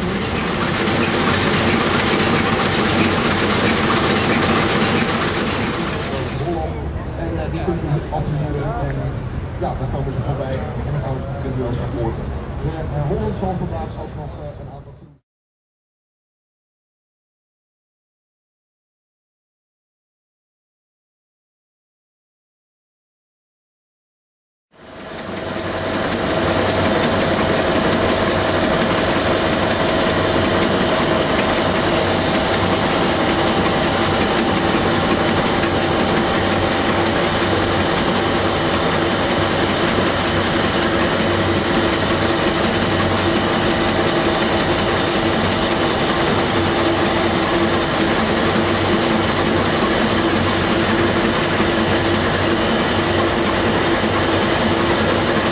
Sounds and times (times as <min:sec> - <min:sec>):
Speech: 0:06.1 - 0:15.2.